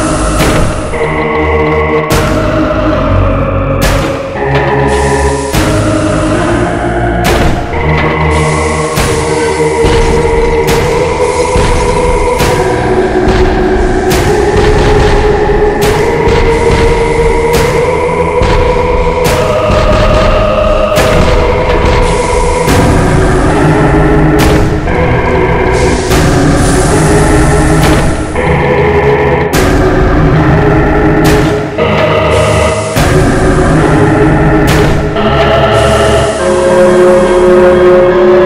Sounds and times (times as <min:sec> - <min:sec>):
Music: 0:00.0 - 0:38.4.